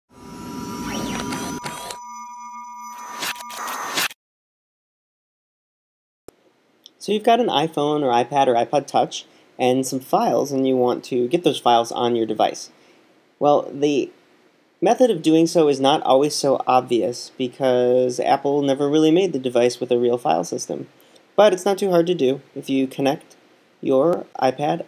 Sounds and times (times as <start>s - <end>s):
Speech: 6.9s - 12.7s, 13.4s - 14.2s, 14.8s - 24.8s.